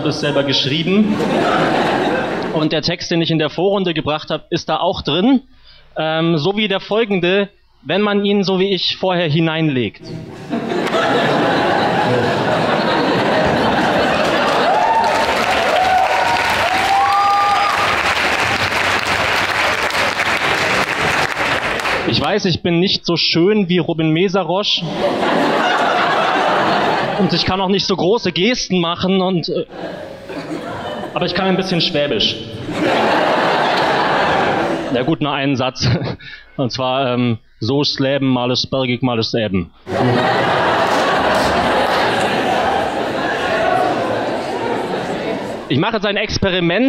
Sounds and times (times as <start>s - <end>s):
Speech: 0.0s - 1.2s, 2.6s - 10.2s, 22.1s - 24.9s, 27.2s - 29.7s, 31.2s - 32.6s, 34.9s - 39.7s, 44.9s - 46.8s.